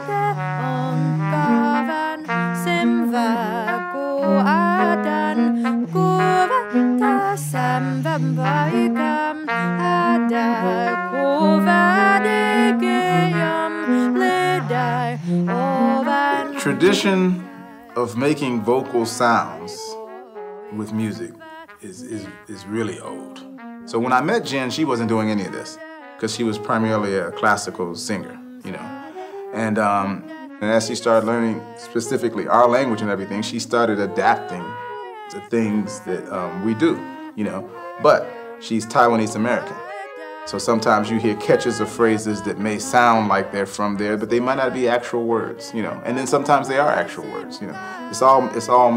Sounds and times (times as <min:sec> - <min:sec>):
Trumpet: 0:00.0 - 0:48.9
Speech: 0:16.5 - 0:20.0, 0:20.7 - 0:28.9, 0:29.6 - 0:34.7, 0:35.3 - 0:39.8, 0:40.5 - 0:48.9.